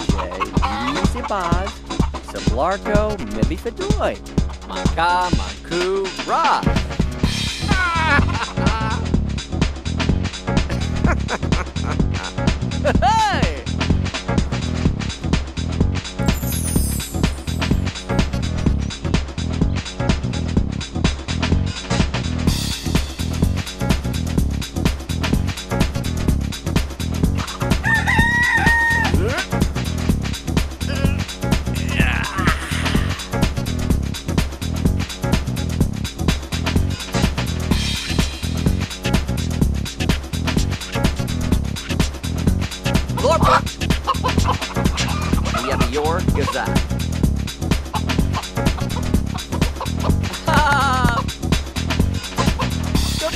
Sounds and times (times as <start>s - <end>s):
Music: 0.0s - 53.3s.